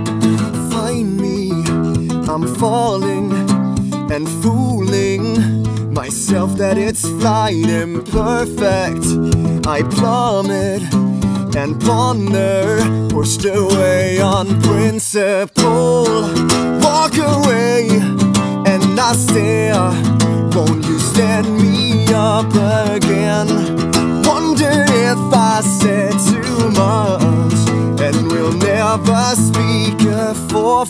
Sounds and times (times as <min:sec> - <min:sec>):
Music: 0:00.0 - 0:30.8.